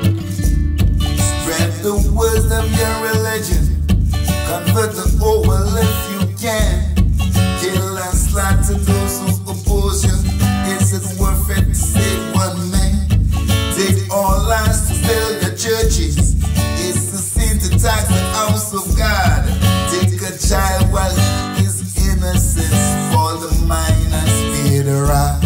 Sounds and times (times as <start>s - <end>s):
Music: 0.0s - 25.4s.